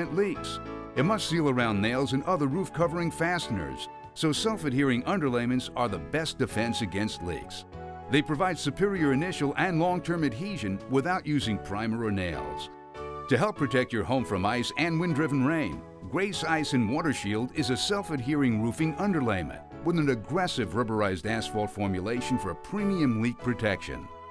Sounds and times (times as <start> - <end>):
Speech: 0.0 - 12.7, 13.3 - 24.1
Music: 0.0 - 24.3.